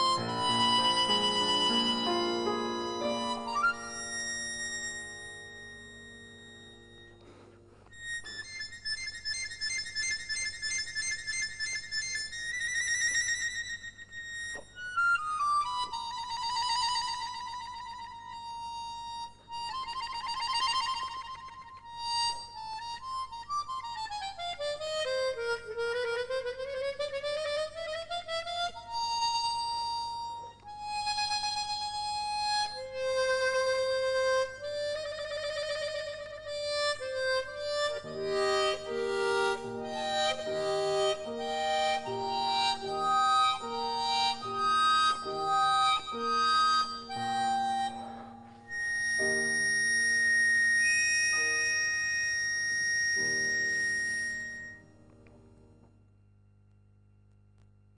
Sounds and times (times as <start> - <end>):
Piano: 0.0 - 9.5, 15.0 - 55.8
Harmonica: 0.0 - 55.4.